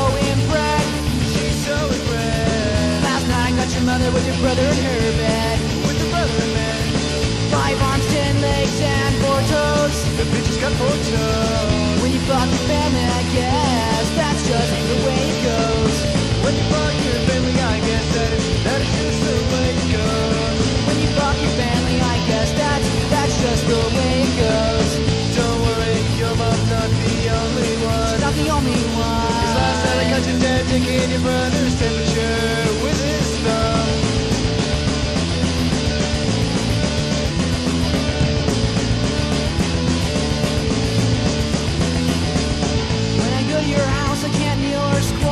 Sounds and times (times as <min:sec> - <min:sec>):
Music: 0:00.0 - 0:45.3.